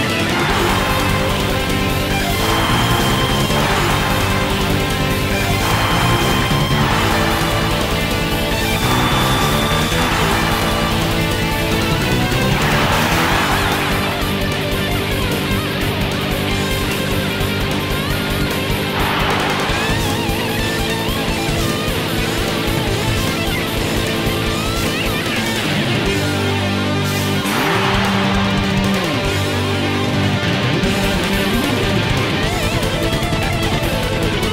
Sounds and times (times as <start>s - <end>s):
Bass guitar: 0.0s - 34.5s.